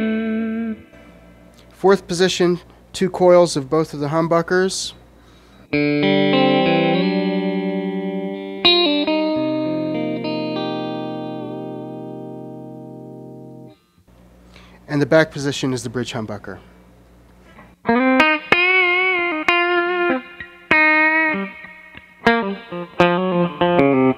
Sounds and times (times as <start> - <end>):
Electric guitar: 0.0 - 1.8, 5.4 - 13.9, 17.4 - 24.1
Speech: 1.8 - 5.0, 14.9 - 16.7.